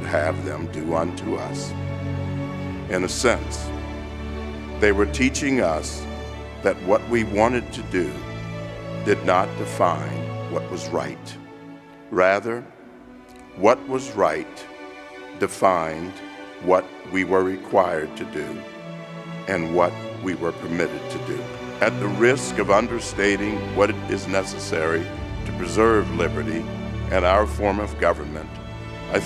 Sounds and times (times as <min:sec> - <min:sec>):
Male speech, man speaking: 0:00.0 - 0:01.7, 0:02.9 - 0:03.7, 0:04.8 - 0:06.0, 0:06.6 - 0:08.2, 0:09.1 - 0:11.4, 0:12.1 - 0:12.7, 0:13.6 - 0:14.7, 0:15.4 - 0:18.6, 0:19.5 - 0:29.2
Music: 0:00.0 - 0:29.2
Narration, monologue: 0:00.0 - 0:29.2.